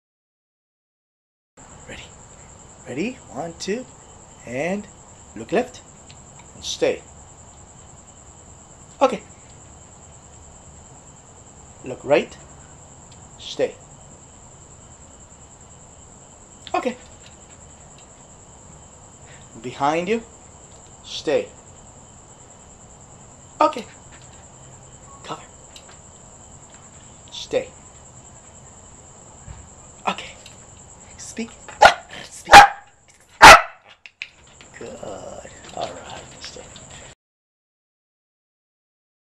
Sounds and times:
Speech: 1.9s - 2.1s, 2.9s - 5.8s, 6.6s - 7.1s, 9.0s - 9.3s, 11.8s - 12.4s, 13.4s - 13.8s, 16.7s - 17.1s, 19.6s - 20.3s, 21.0s - 21.6s, 23.6s - 23.9s, 25.2s - 25.5s, 27.3s - 27.8s, 30.1s - 30.4s, 31.2s - 31.6s, 34.8s - 37.2s
Bow-wow: 31.8s - 33.9s.

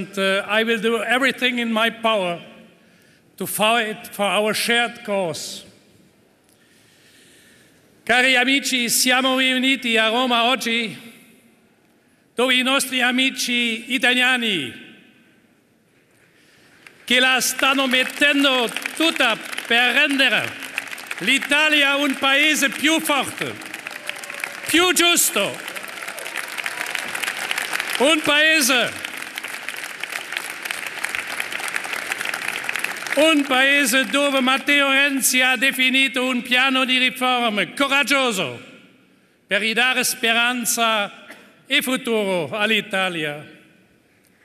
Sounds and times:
Male speech, man speaking: 0.0s - 2.5s, 3.4s - 5.7s, 8.1s - 11.1s, 12.4s - 14.8s, 17.1s - 20.5s, 21.2s - 23.6s, 24.7s - 25.7s, 28.0s - 29.0s, 33.2s - 38.7s, 39.5s - 43.6s
Narration, monologue: 0.0s - 23.8s, 24.6s - 25.8s, 27.8s - 29.4s, 33.0s - 44.4s.

